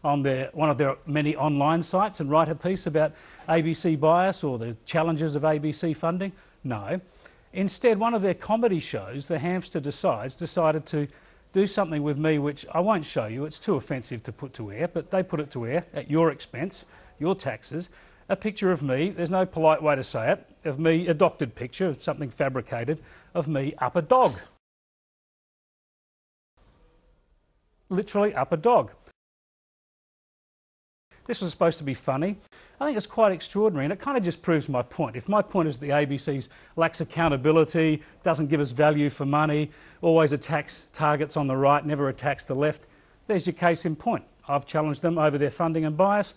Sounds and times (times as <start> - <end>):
Speech: 0.0 - 24.6, 27.9 - 29.1, 31.3 - 46.3.